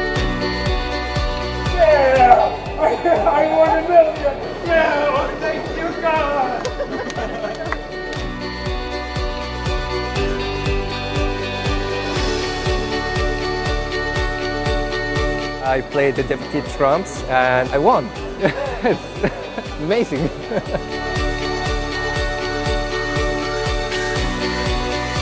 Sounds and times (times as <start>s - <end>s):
Music: 0.0s - 25.2s.